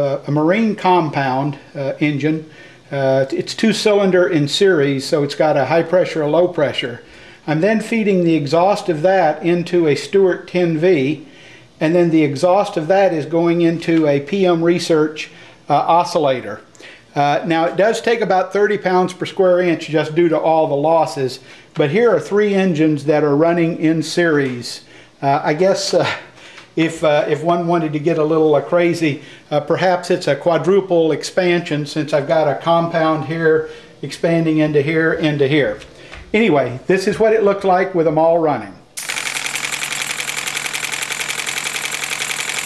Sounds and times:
Speech: 0.0 - 11.2, 11.8 - 38.8.

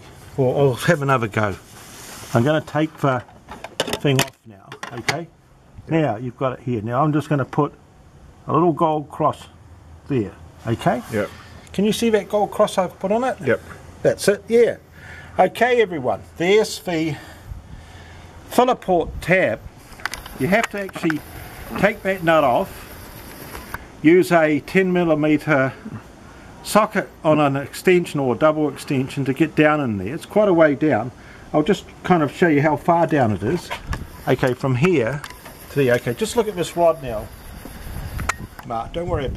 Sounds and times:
Outside, urban or manmade: 0.0 - 39.3
Speech: 0.4 - 1.6, 2.3 - 3.3, 4.0 - 5.3, 5.9 - 7.8, 8.5 - 14.8, 15.4 - 17.3, 18.5 - 19.7, 20.4 - 22.7, 24.0 - 26.0, 26.6 - 37.3, 38.6 - 39.3.

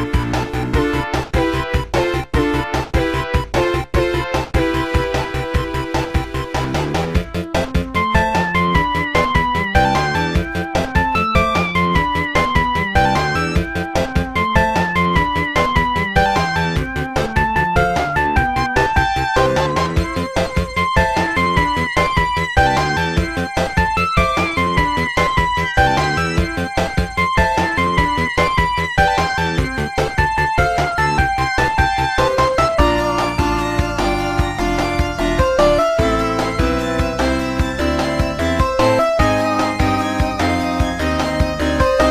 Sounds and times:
Exciting music: 0.0 - 42.1.

